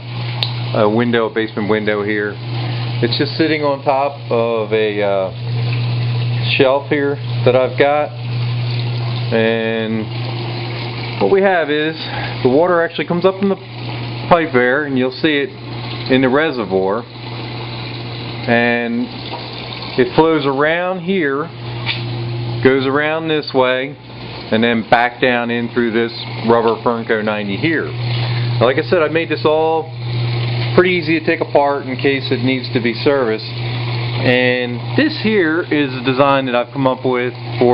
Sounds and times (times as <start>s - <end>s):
Speech: 0.7s - 2.4s, 3.0s - 5.4s, 6.4s - 8.2s, 9.3s - 10.1s, 11.2s - 13.6s, 14.3s - 17.1s, 18.5s - 19.2s, 20.0s - 21.5s, 22.6s - 28.0s, 28.6s - 30.0s, 30.8s - 33.6s, 34.2s - 37.7s.